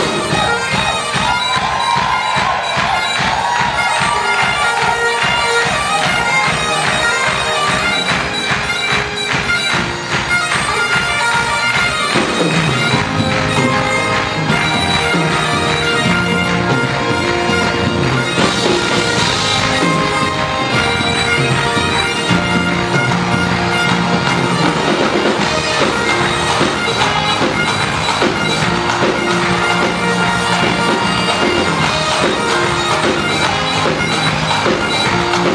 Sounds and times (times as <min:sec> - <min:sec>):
Bagpipes: 0:00.0 - 0:35.5
Wind instrument, woodwind instrument: 0:00.0 - 0:35.5.